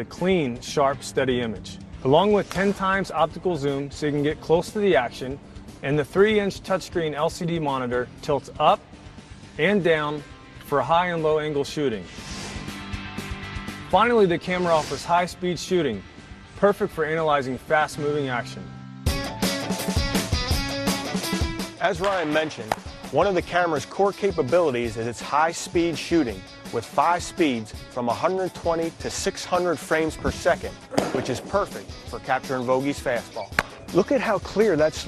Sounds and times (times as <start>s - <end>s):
Speech: 0.0s - 8.8s, 9.6s - 12.1s, 13.9s - 16.0s, 16.6s - 18.7s, 21.8s - 35.0s
Music: 0.0s - 35.0s.